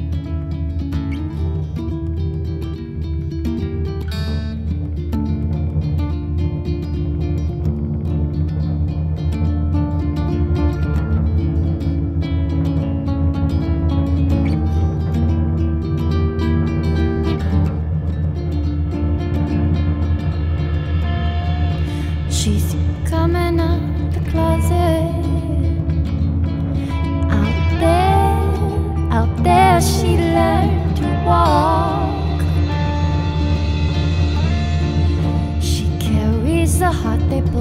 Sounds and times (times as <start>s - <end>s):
Music: 0.0s - 37.6s.